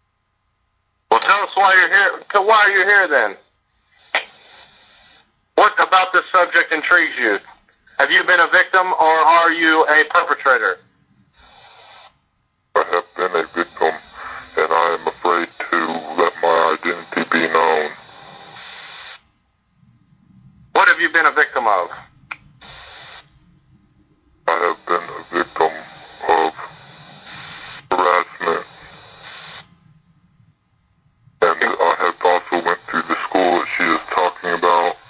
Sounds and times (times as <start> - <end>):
Speech: 1.1 - 3.4, 5.6 - 10.9, 12.8 - 18.0, 20.7 - 22.1, 24.5 - 26.7, 27.9 - 28.8, 31.4 - 35.0.